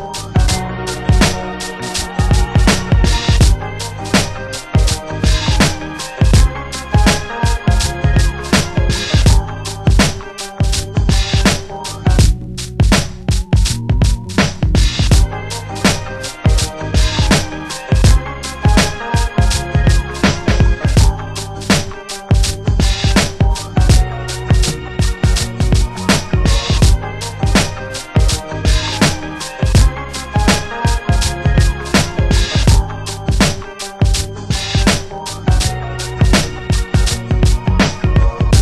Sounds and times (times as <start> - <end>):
Hip hop music: 0.0 - 38.6.